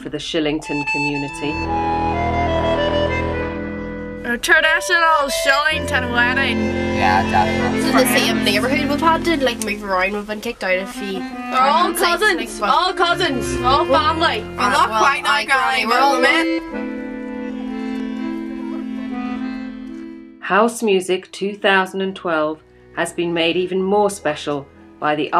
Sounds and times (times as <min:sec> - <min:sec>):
Speech: 0:00.0 - 0:01.6, 0:04.3 - 0:16.5, 0:20.4 - 0:25.3
Music: 0:00.0 - 0:25.3.